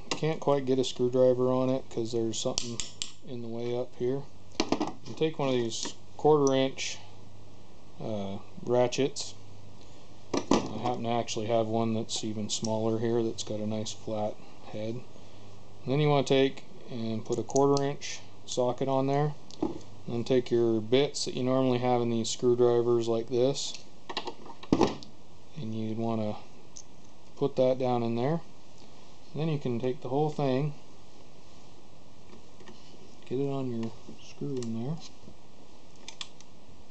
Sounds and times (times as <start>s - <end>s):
Speech: 0.1s - 4.3s, 5.1s - 7.1s, 8.0s - 9.4s, 10.7s - 15.1s, 15.8s - 19.4s, 20.1s - 23.8s, 25.5s - 26.5s, 27.4s - 28.5s, 29.3s - 30.8s, 33.2s - 35.1s.